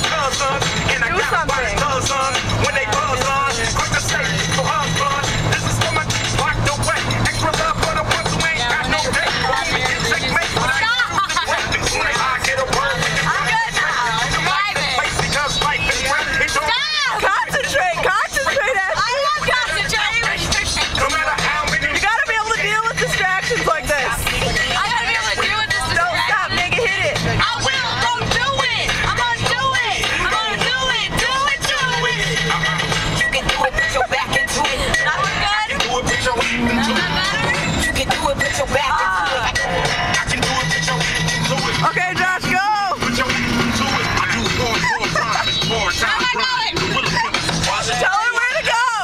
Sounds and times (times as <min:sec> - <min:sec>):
Car: 0:00.0 - 0:49.0
Male singing: 0:00.0 - 0:49.0
Music: 0:00.0 - 0:49.0
Rapping: 0:00.0 - 0:49.0.